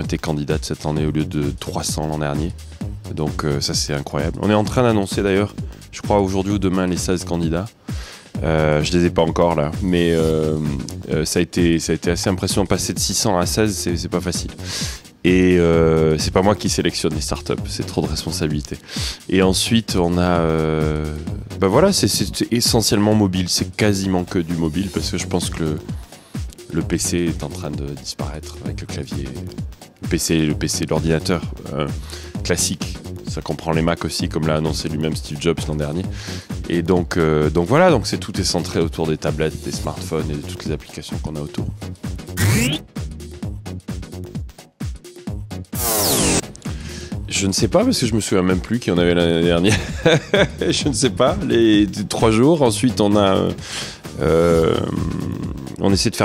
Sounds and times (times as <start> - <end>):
Speech: 0.0 - 7.8, 8.4 - 14.6, 15.2 - 25.9, 26.7 - 41.8, 42.4 - 42.8, 47.3 - 53.6, 54.2 - 56.2
Music: 0.0 - 56.2.